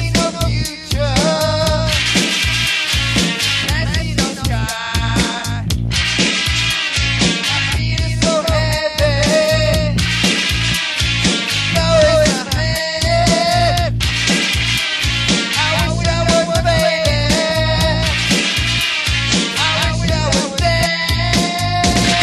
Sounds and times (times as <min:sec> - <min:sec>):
Music: 0:00.0 - 0:22.2.